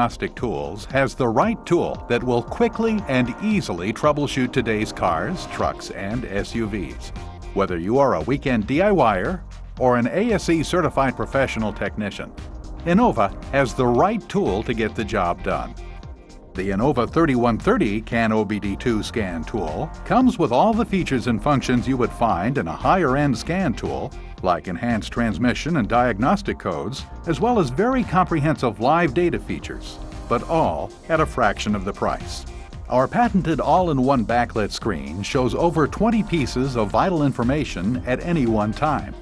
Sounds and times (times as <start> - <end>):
Speech: 0.0 - 15.8, 16.6 - 39.2
Music: 0.0 - 39.2.